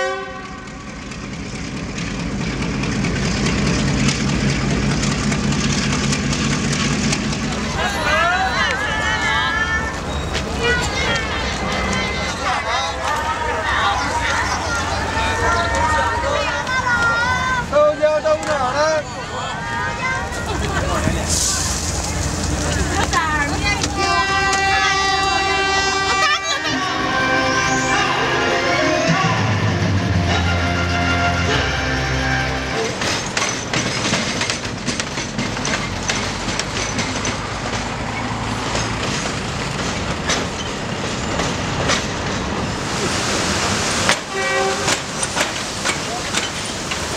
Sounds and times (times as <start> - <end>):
Music: 26.4 - 32.9.